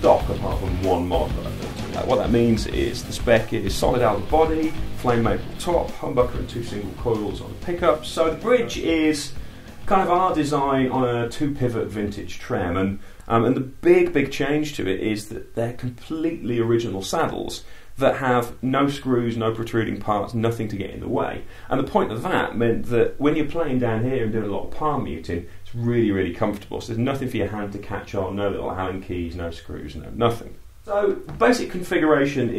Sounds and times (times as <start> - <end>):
Speech: 0.0 - 32.5.